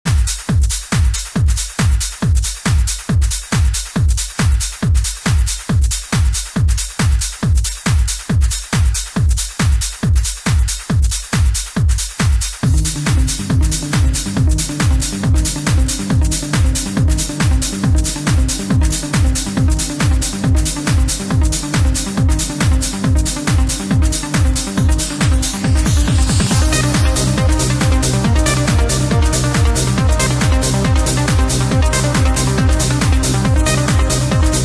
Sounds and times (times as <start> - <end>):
Techno: 0.1 - 34.6.